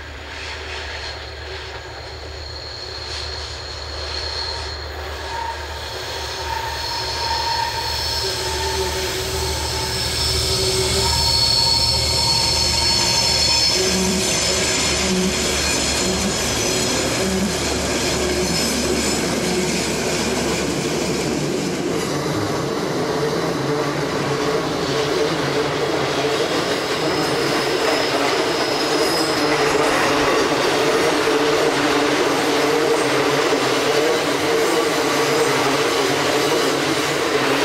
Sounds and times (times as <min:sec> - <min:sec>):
Railroad car, train wagon: 0:00.0 - 0:37.6
Train: 0:00.0 - 0:37.6
Train wheels squealing: 0:00.0 - 0:37.6.